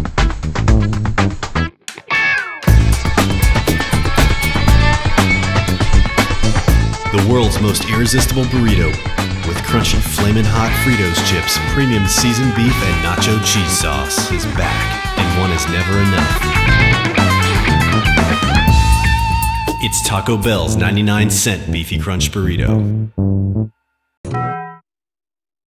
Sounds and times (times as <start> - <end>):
Music: 0.0 - 24.8
Speech: 7.1 - 16.6, 19.8 - 22.9.